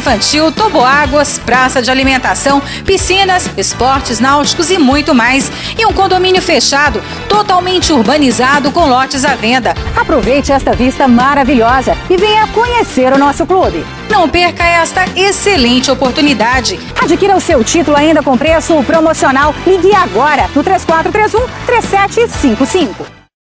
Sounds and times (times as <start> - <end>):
Speech: 0.0 - 23.0
Music: 0.0 - 23.4.